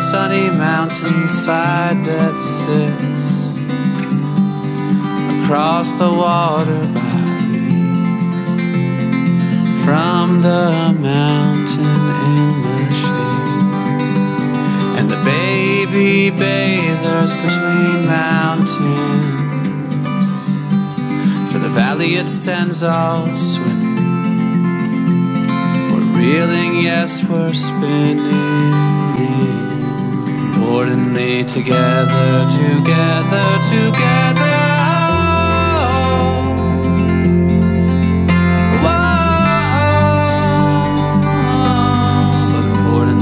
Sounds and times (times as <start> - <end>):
Music: 0.0 - 43.2.